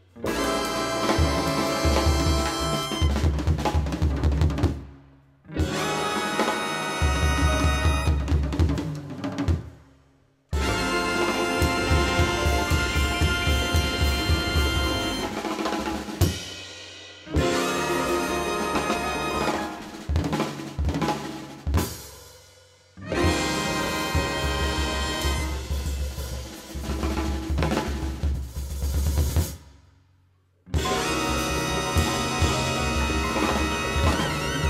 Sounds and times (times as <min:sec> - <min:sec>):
Drum roll: 0:00.0 - 0:22.3, 0:23.0 - 0:29.8, 0:30.8 - 0:34.7
Drum kit: 0:00.0 - 0:30.0, 0:30.7 - 0:34.7.